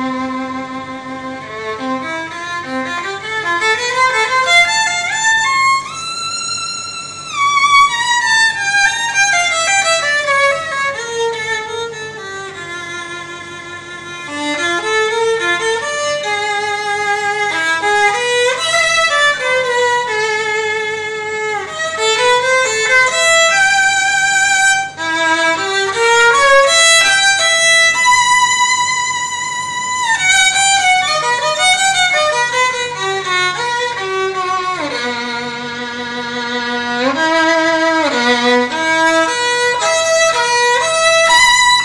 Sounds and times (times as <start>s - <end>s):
Violin, fiddle: 0.0s - 41.8s.